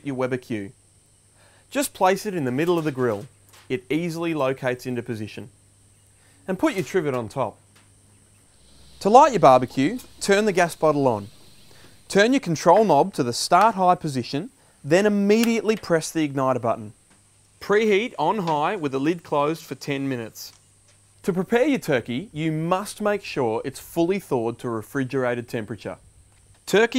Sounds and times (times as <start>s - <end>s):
Speech: 0.0s - 0.8s, 1.7s - 5.5s, 6.4s - 7.6s, 9.0s - 11.3s, 12.1s - 17.0s, 17.6s - 20.6s, 21.2s - 26.0s, 26.7s - 26.9s.